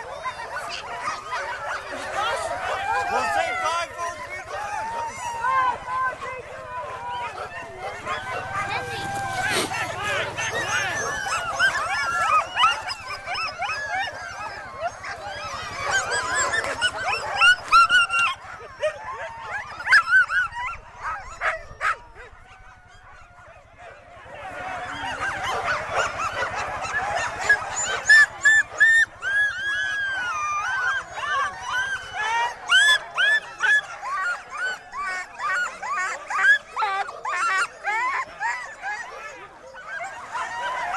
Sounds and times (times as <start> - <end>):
Bow-wow: 0.0 - 40.9.